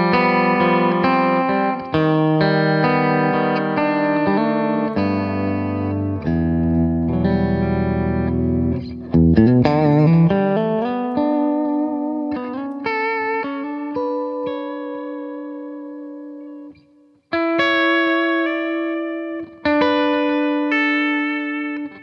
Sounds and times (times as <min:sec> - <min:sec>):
Music: 0:00.0 - 0:22.0.